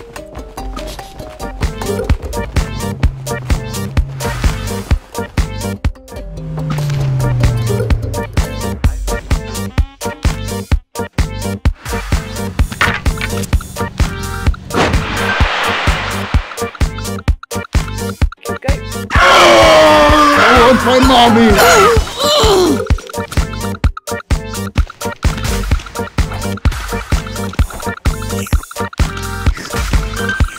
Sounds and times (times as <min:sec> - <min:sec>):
Music: 0:00.0 - 0:30.5
Speech: 0:18.4 - 0:19.0, 0:20.3 - 0:22.8.